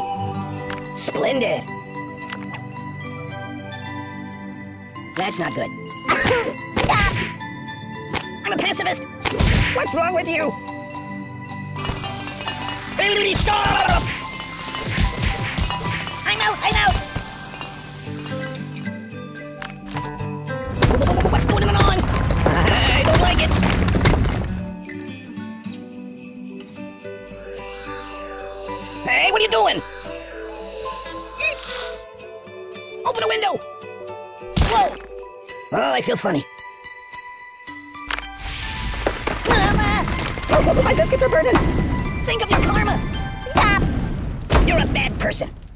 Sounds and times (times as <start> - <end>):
Music: 0.0 - 45.7.